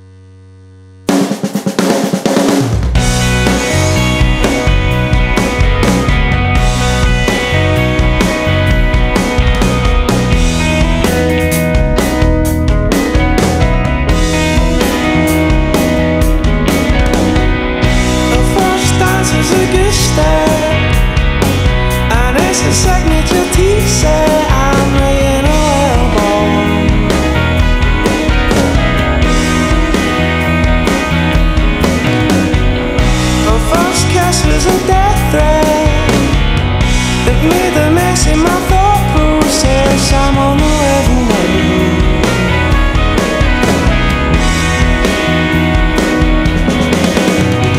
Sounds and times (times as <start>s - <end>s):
Music: 0.0s - 47.7s.